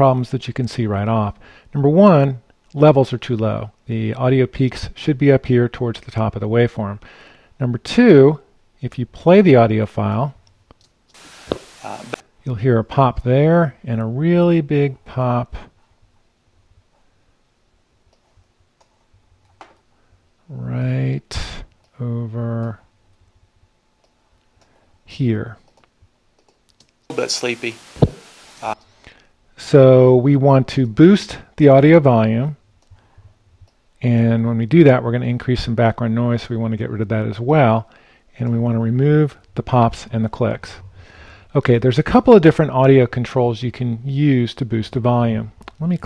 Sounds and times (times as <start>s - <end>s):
Speech: 0.0s - 7.0s, 7.6s - 10.4s, 11.8s - 15.7s, 20.5s - 22.8s, 25.1s - 25.6s, 27.1s - 27.8s, 29.6s - 32.6s, 34.0s - 40.8s, 41.5s - 46.0s.